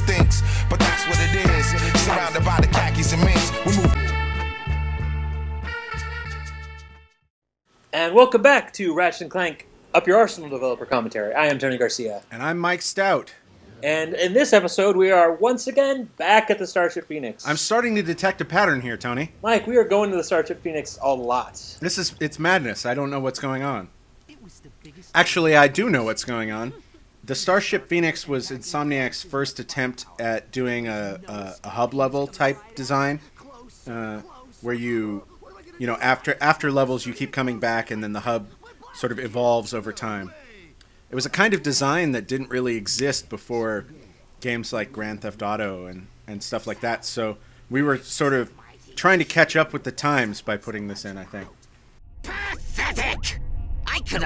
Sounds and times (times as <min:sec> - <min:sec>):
Speech: 0:07.9 - 0:51.6, 0:52.3 - 0:54.2.